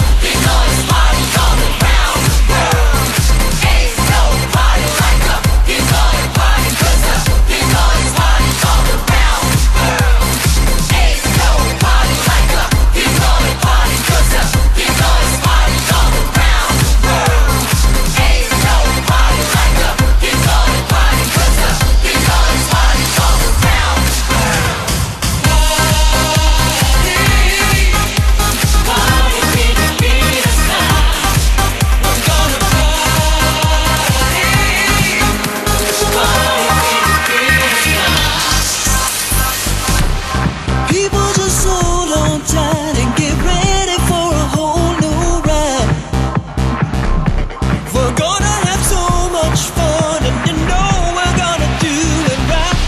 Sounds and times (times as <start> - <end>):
Music: 0.0 - 52.8.